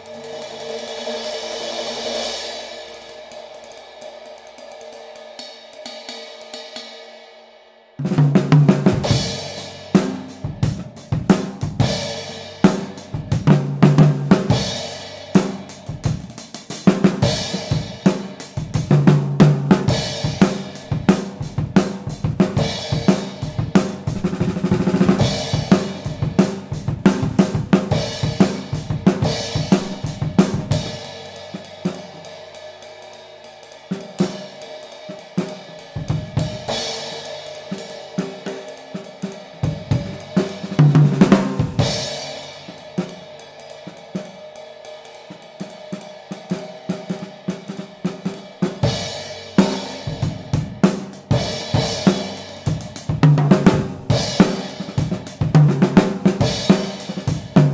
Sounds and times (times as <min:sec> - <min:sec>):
Snare drum: 0:15.4 - 0:30.8, 0:37.7 - 0:43.2, 0:49.6 - 0:57.7.